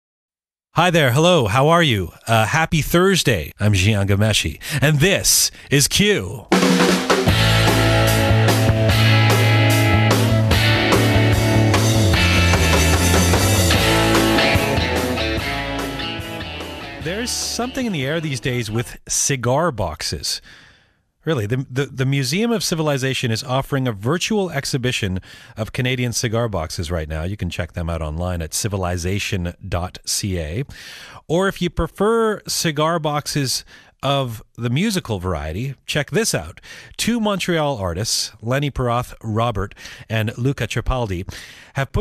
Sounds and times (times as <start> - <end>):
Speech: 0.8 - 6.5, 17.0 - 20.4, 21.2 - 42.0.